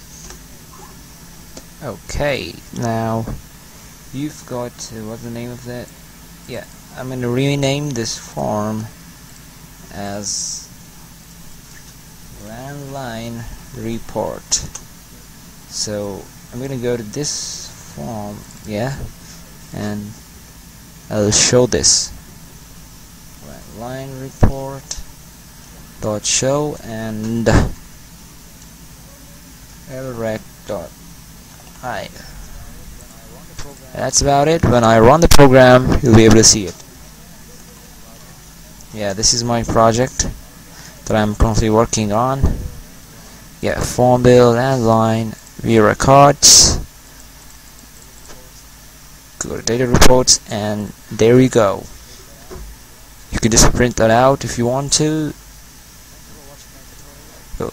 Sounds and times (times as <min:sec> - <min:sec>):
Speech: 0:01.8 - 0:03.4, 0:04.1 - 0:05.9, 0:06.5 - 0:08.9, 0:09.9 - 0:10.7, 0:12.4 - 0:14.7, 0:15.7 - 0:19.1, 0:19.7 - 0:20.2, 0:21.1 - 0:22.2, 0:23.4 - 0:25.0, 0:26.0 - 0:27.8, 0:29.0 - 0:31.0, 0:31.8 - 0:42.9, 0:43.6 - 0:46.9, 0:49.4 - 0:52.7, 0:53.3 - 0:55.4, 0:56.1 - 0:57.7.